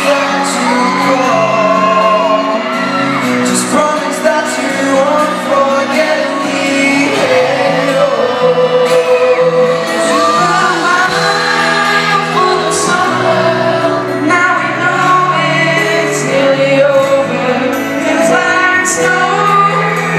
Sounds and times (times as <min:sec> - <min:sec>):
Music: 0:00.0 - 0:20.1.